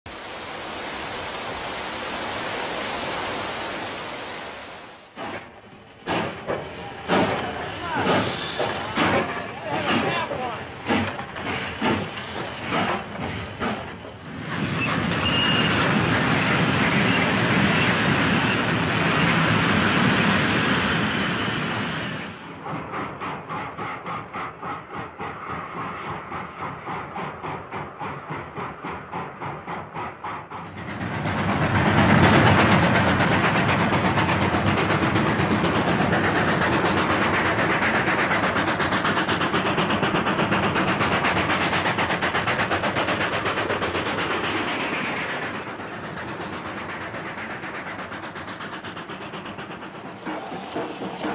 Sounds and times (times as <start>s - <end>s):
Train: 0.0s - 51.3s
Railroad car, train wagon: 0.1s - 51.3s
Speech: 7.4s - 8.2s, 9.2s - 10.7s.